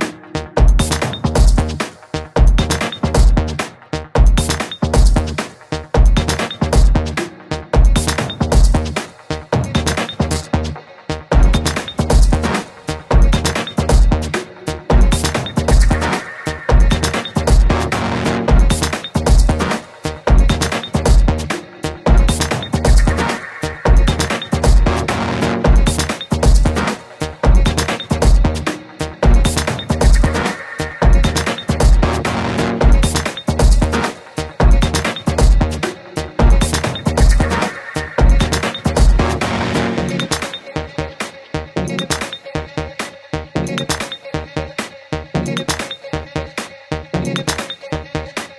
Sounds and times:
Dubstep: 0:00.0 - 0:48.5.

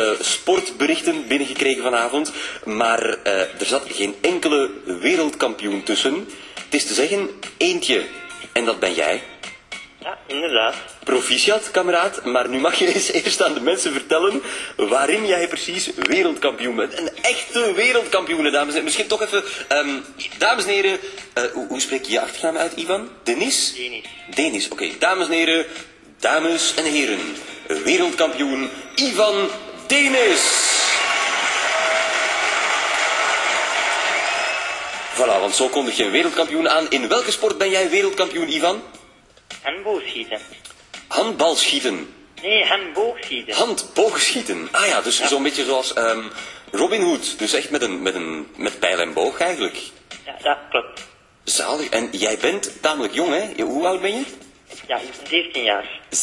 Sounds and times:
Speech: 0:00.0 - 0:09.3, 0:10.0 - 0:30.8, 0:35.2 - 0:39.0, 0:39.6 - 0:56.2.

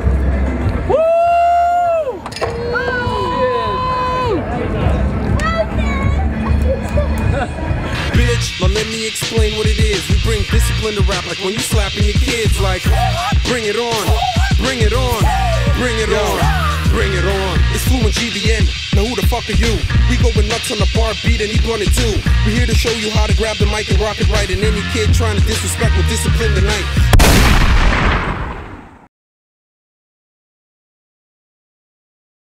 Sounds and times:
Music: 0:00.0 - 0:27.2.

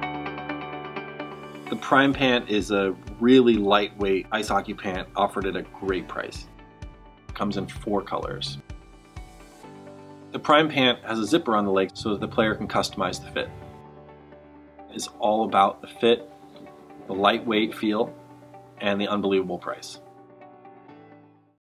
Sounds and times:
Music: 0:00.0 - 0:21.6
Speech: 0:01.7 - 0:06.5, 0:07.4 - 0:08.6, 0:10.4 - 0:13.6, 0:14.9 - 0:16.3, 0:17.1 - 0:18.1, 0:18.8 - 0:20.0.

